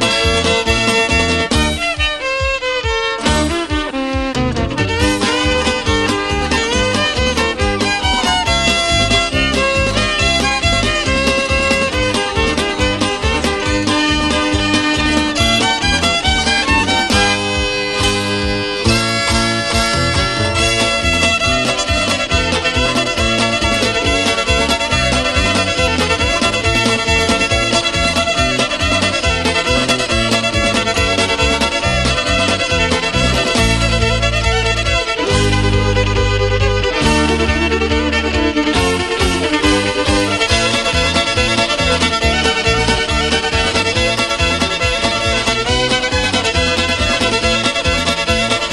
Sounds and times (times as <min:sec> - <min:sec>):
Violin, fiddle: 0:00.0 - 0:48.7.